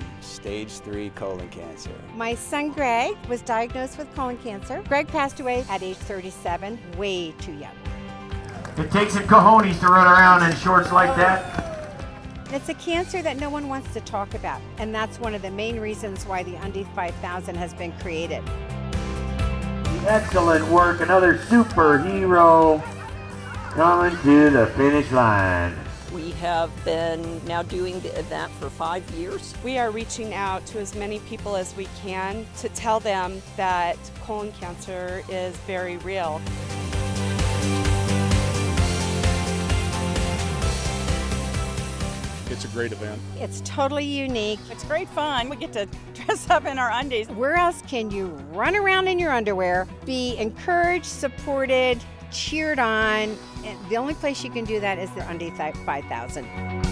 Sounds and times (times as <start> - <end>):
Music: 0.0 - 56.9
Run: 9.6 - 12.6.